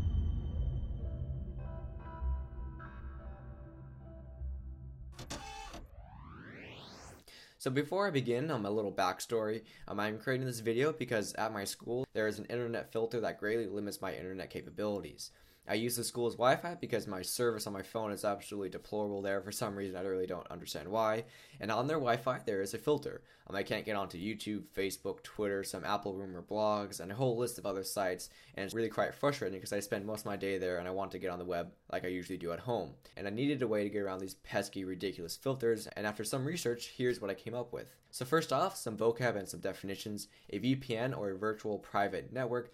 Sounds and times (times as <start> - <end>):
Speech: 7.6 - 42.7.